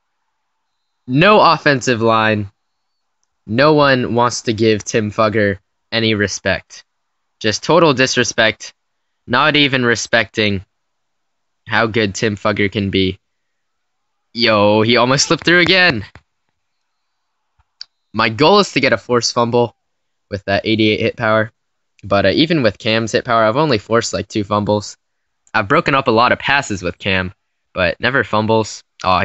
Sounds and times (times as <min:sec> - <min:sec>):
Speech: 0:01.1 - 0:02.5, 0:03.5 - 0:06.8, 0:07.4 - 0:08.7, 0:09.3 - 0:10.7, 0:11.7 - 0:13.2, 0:14.4 - 0:16.2, 0:18.2 - 0:19.7, 0:20.3 - 0:29.2.